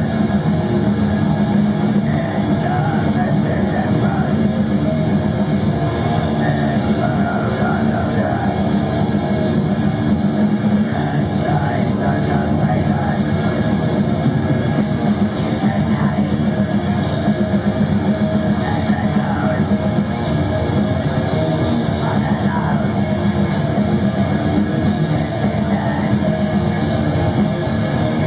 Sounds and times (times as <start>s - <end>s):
Music: 0.0s - 28.2s.